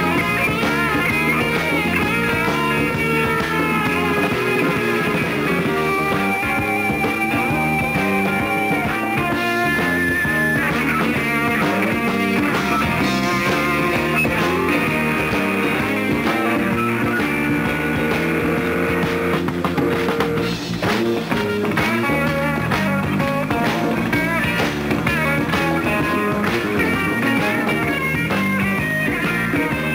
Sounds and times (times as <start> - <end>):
Rock and roll: 0.0 - 29.9.